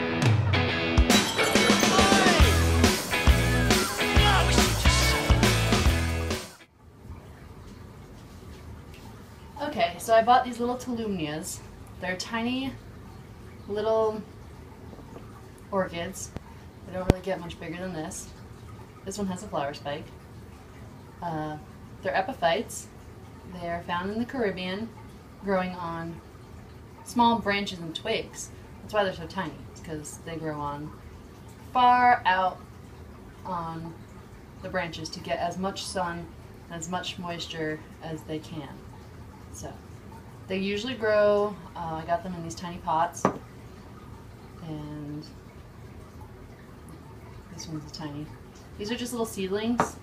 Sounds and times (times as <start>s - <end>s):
Speech: 9.6s - 12.8s, 15.7s - 16.3s, 16.9s - 18.3s, 19.1s - 20.1s, 21.2s - 22.9s, 23.5s - 26.2s, 27.1s - 30.9s, 31.8s - 32.6s, 33.5s - 34.0s, 34.6s - 38.8s, 40.5s - 43.3s, 44.6s - 45.3s, 47.5s - 50.0s.